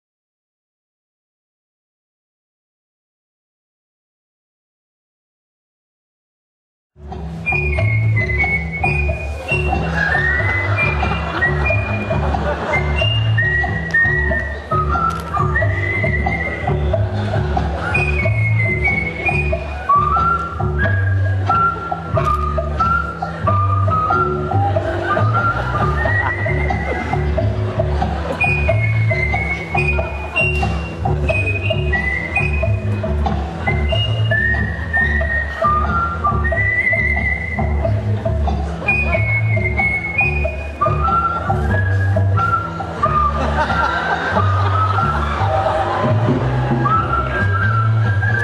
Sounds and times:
Whistle: 0:07.4 - 0:12.1, 0:12.7 - 0:16.9, 0:17.8 - 0:27.0, 0:28.4 - 0:33.0, 0:33.6 - 0:38.0, 0:38.8 - 0:45.4, 0:46.7 - 0:48.4.

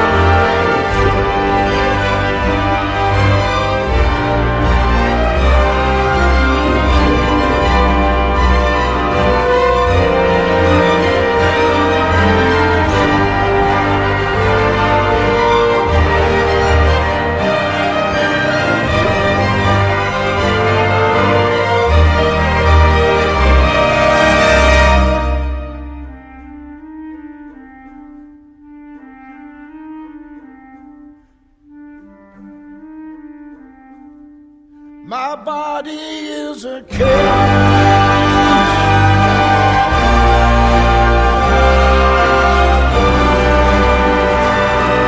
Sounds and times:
Clarinet: 0:00.0 - 0:35.1, 0:36.9 - 0:45.0.

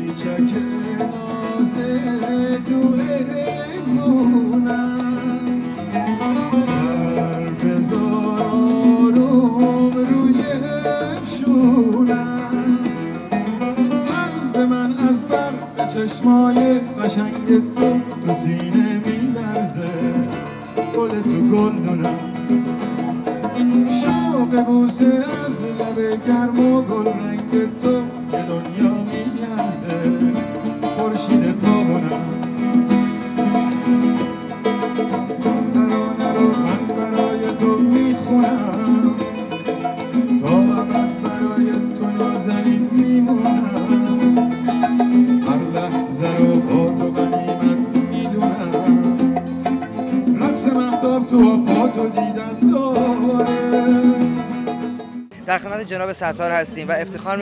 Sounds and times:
Singing: 0:00.0 - 0:13.1, 0:35.6 - 0:39.4, 0:50.3 - 0:54.5.

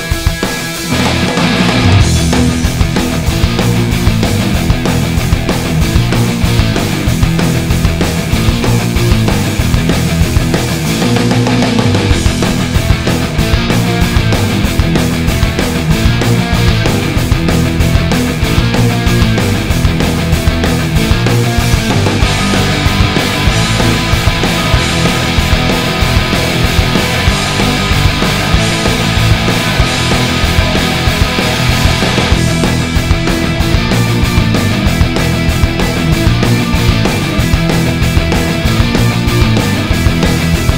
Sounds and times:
Bass guitar: 0:00.0 - 0:40.7
Electric guitar: 0:00.0 - 0:40.7.

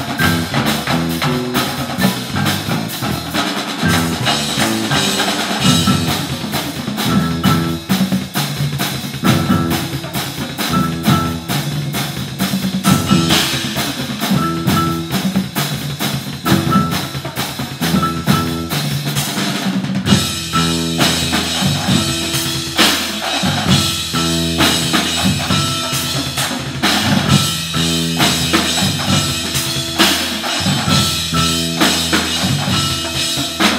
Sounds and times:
Percussion: 0:00.0 - 0:33.7.

